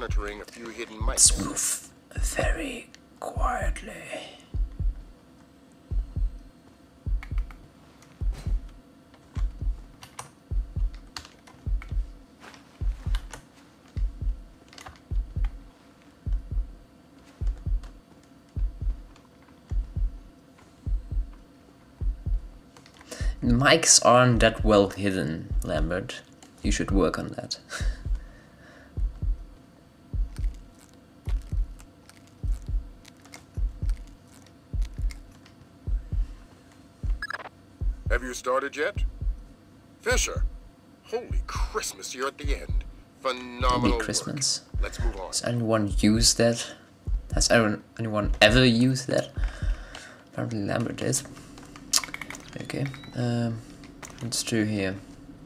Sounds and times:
Speech: 0.0s - 4.4s, 23.4s - 27.7s, 38.1s - 39.0s, 40.0s - 40.4s, 41.1s - 49.4s, 50.4s - 51.3s, 52.6s - 53.6s, 54.2s - 55.0s.

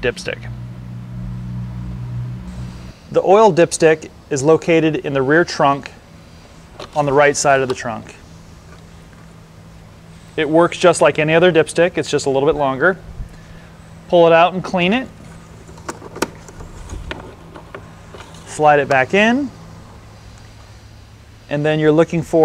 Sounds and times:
Speech: 0.0s - 0.5s, 3.1s - 6.0s, 6.9s - 8.2s, 10.4s - 13.0s, 14.1s - 15.2s, 18.5s - 19.6s, 21.5s - 22.4s.

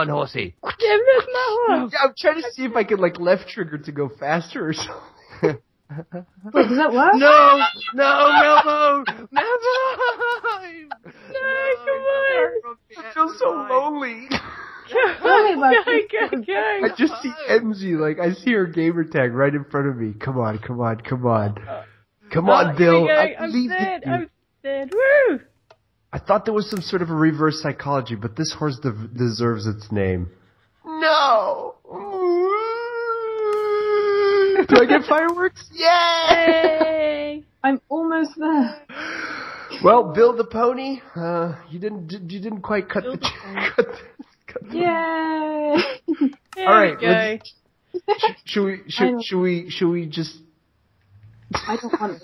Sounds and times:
Speech: 0.0s - 4.9s, 6.5s - 14.3s, 14.9s - 25.4s, 26.2s - 30.3s, 34.1s - 38.8s, 39.8s - 43.8s, 44.5s - 45.8s, 46.6s - 50.4s.

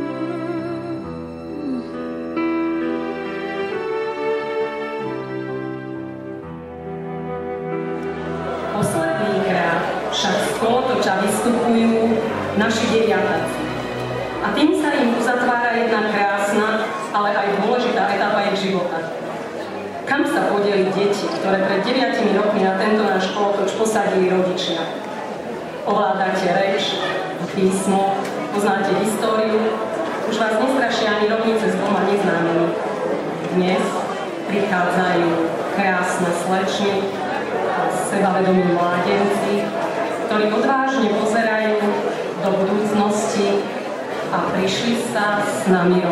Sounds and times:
Female speech, woman speaking: 8.7s - 13.6s, 14.4s - 19.1s, 20.0s - 25.0s, 25.9s - 32.8s, 33.5s - 37.1s, 37.8s - 46.1s.

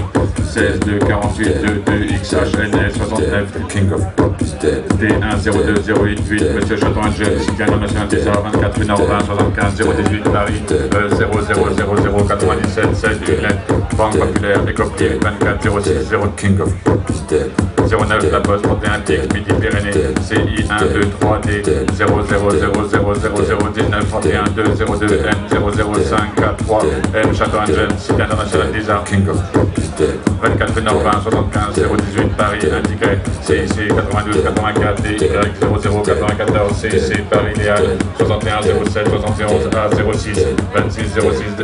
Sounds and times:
Music: 0.0s - 41.6s.

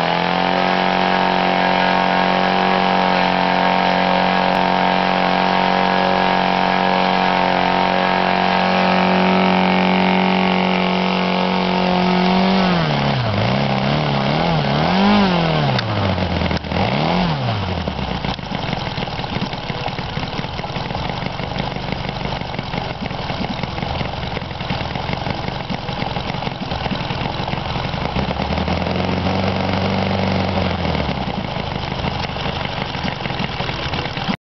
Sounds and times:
Engine: 0.0s - 34.4s.

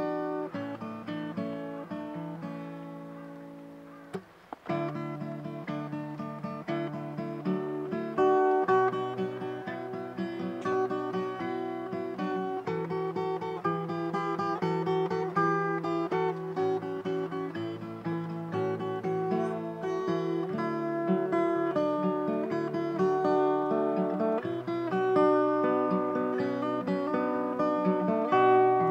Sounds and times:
Acoustic guitar: 0.0s - 28.9s
Strum: 0.0s - 28.9s.

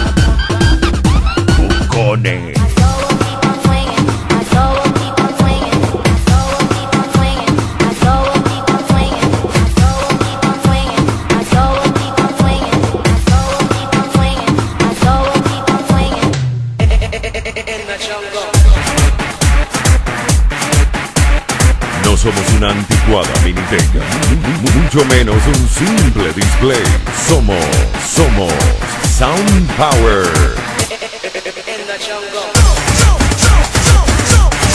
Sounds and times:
Hip hop music: 0.0s - 34.7s.

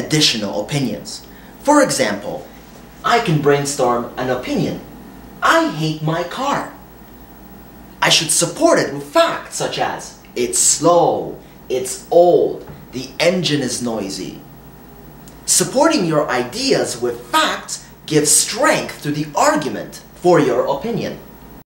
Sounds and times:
Speech: 0.0s - 6.8s, 8.0s - 14.4s, 15.5s - 21.3s.

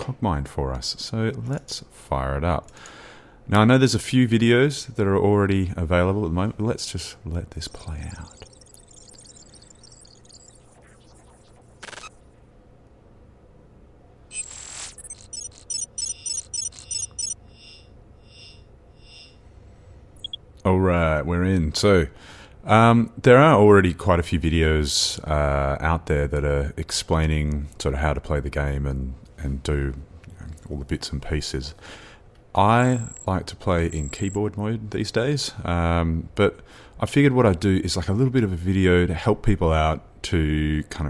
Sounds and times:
Speech: 0.0s - 2.7s, 3.5s - 8.4s, 20.6s - 31.8s, 32.6s - 41.1s.

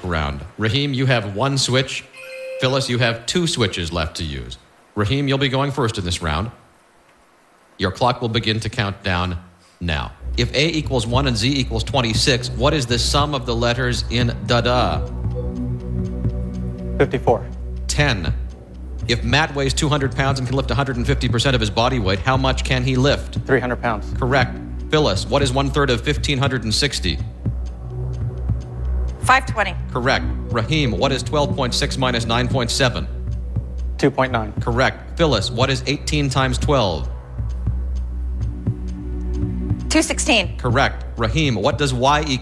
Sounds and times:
Speech: 0.0s - 6.6s, 7.8s - 15.1s, 17.0s - 18.4s, 19.1s - 27.3s, 29.2s - 33.1s, 34.0s - 37.1s, 39.9s - 42.4s
Music: 2.2s - 3.1s, 10.0s - 42.4s.

